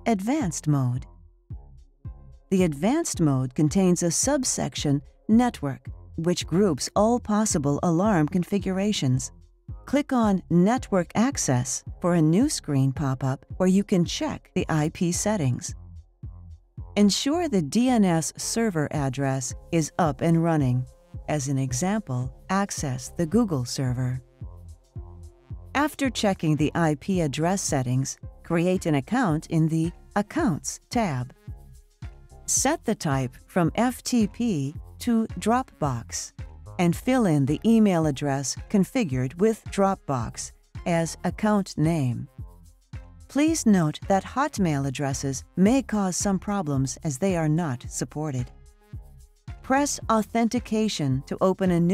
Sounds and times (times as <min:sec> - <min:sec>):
Speech: 0:00.0 - 0:01.0, 0:02.5 - 0:09.3, 0:09.9 - 0:15.8, 0:17.0 - 0:24.2, 0:25.8 - 0:31.4, 0:32.5 - 0:42.3, 0:43.3 - 0:48.5, 0:49.7 - 0:51.9.